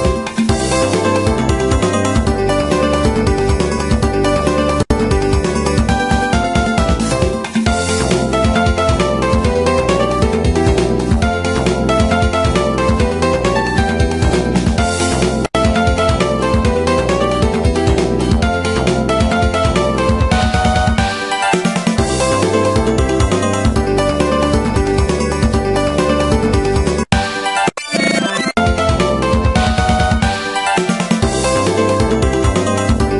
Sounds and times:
Music: 0:00.0 - 0:33.2.

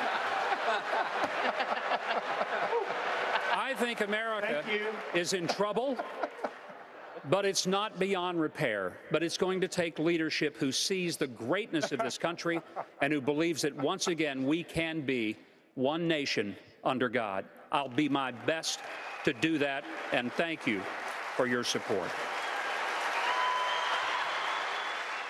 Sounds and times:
Speech: 0:03.5 - 0:06.0, 0:07.3 - 0:22.1.

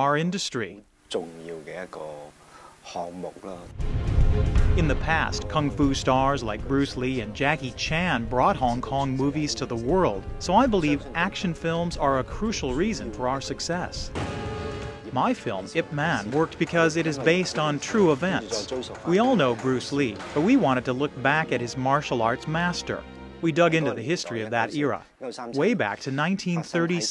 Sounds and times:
Speech: 0:00.0 - 0:03.7, 0:04.8 - 0:14.1, 0:15.1 - 0:27.1
Music: 0:03.6 - 0:27.1.

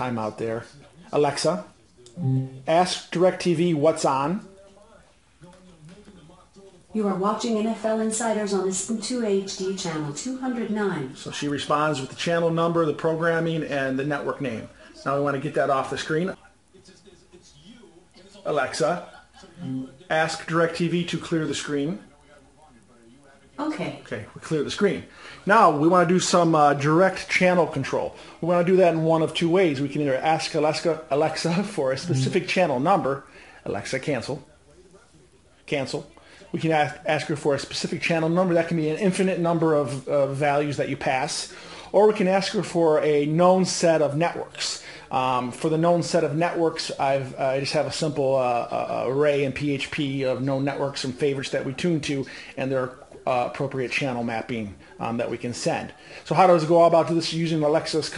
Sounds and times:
Speech: 0:00.0 - 0:58.1.

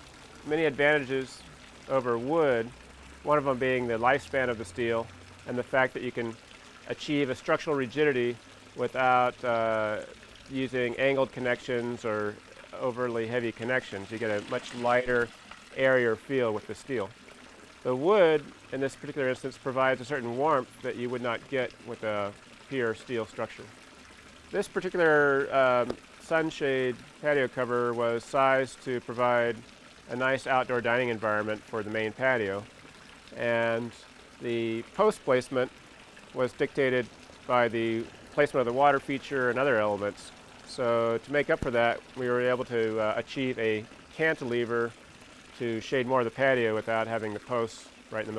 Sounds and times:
Speech: 0:00.5 - 0:02.7, 0:03.3 - 0:17.1, 0:17.8 - 0:23.7, 0:24.6 - 0:32.7, 0:33.4 - 0:35.7, 0:36.4 - 0:44.9, 0:45.6 - 0:48.3.

